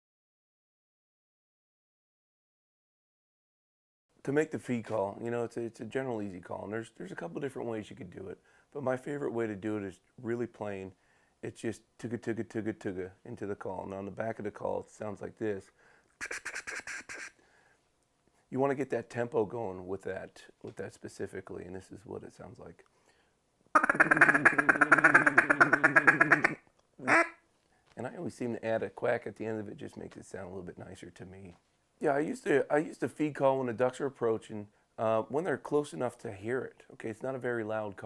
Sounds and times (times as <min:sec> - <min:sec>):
Speech: 0:04.2 - 0:15.7, 0:18.5 - 0:22.8, 0:28.0 - 0:38.0.